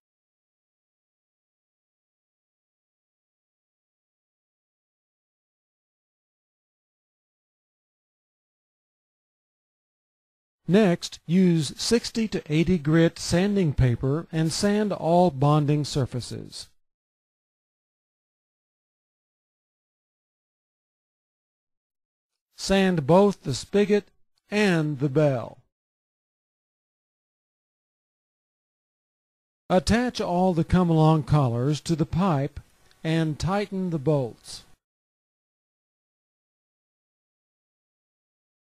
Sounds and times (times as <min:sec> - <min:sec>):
Speech: 0:10.7 - 0:16.8, 0:22.6 - 0:25.7, 0:29.7 - 0:34.8.